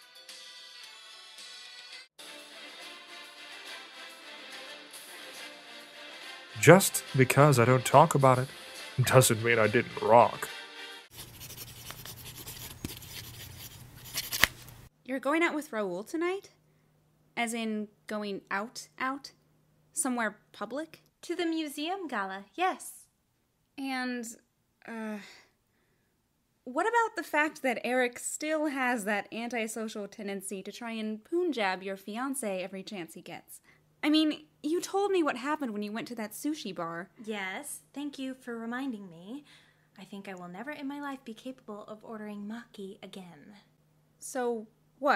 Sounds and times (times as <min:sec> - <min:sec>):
Music: 0:00.0 - 0:11.1
Speech: 0:06.6 - 0:10.5, 0:15.0 - 0:16.5, 0:17.4 - 0:19.4, 0:20.0 - 0:23.1, 0:23.8 - 0:25.4, 0:26.7 - 0:39.4, 0:40.0 - 0:45.1.